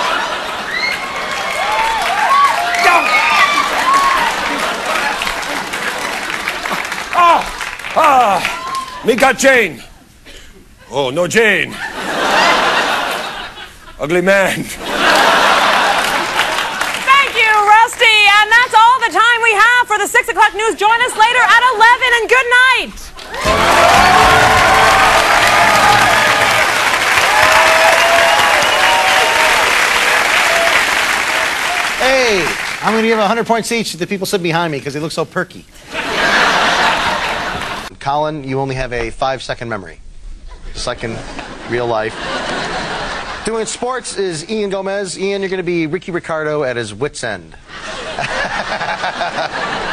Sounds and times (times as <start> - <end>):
Applause: 0.0 - 9.2, 15.0 - 18.3, 23.2 - 33.3.